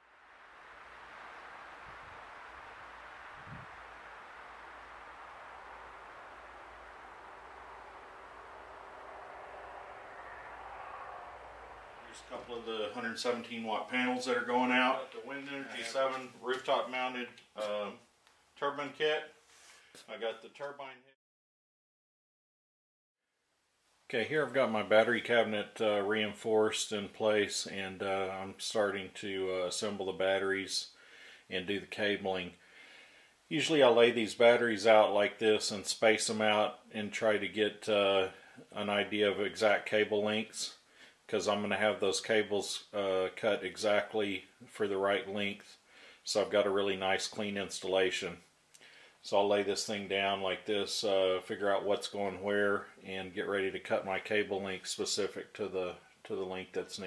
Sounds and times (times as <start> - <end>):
Speech: 12.1 - 18.0, 18.6 - 19.4, 20.1 - 21.2, 24.1 - 32.6, 33.5 - 48.5, 49.2 - 57.0.